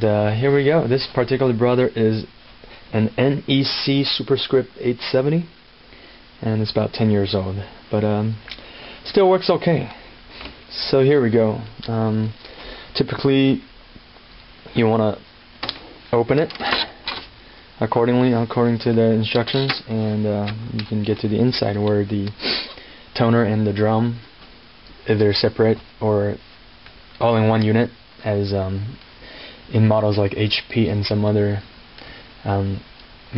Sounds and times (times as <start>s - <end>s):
Speech: 0.0s - 2.3s, 2.9s - 5.6s, 6.4s - 8.4s, 9.0s - 10.0s, 10.7s - 12.4s, 13.0s - 13.7s, 14.7s - 15.3s, 16.1s - 16.8s, 17.8s - 22.4s, 23.2s - 24.3s, 25.0s - 26.4s, 27.2s - 29.0s, 29.7s - 31.7s, 32.4s - 33.3s.